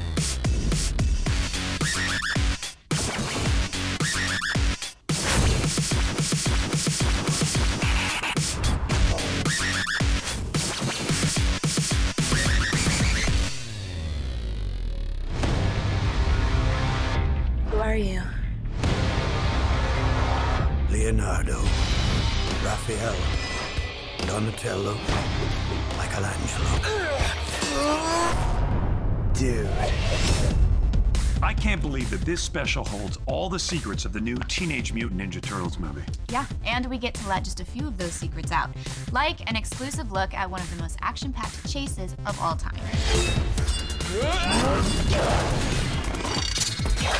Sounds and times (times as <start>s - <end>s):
Music: 0.0s - 47.1s
Speech: 31.4s - 38.5s.